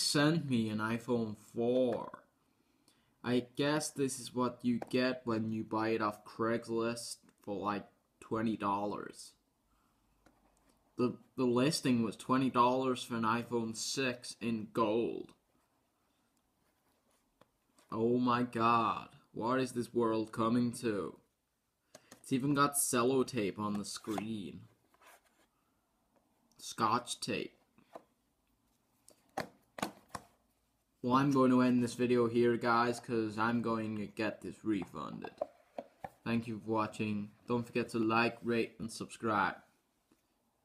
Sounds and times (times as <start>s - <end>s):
Speech: 0.0s - 2.3s, 3.2s - 9.4s, 11.0s - 15.4s, 17.9s - 21.3s, 22.2s - 24.8s, 26.6s - 27.6s, 31.0s - 35.4s, 36.2s - 39.7s
Inside, small room: 0.0s - 40.6s.